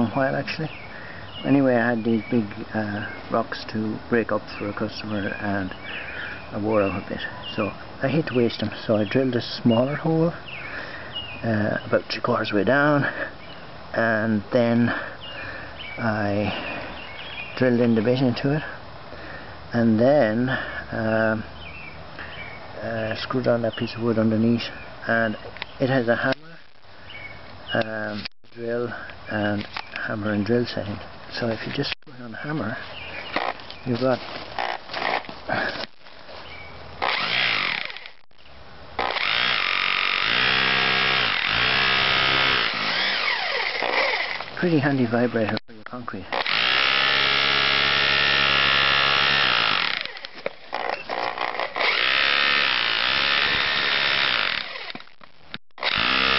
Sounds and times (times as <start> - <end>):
Drill: 34.6 - 35.3, 37.0 - 38.2, 39.0 - 44.5, 46.3 - 55.2, 55.8 - 56.3.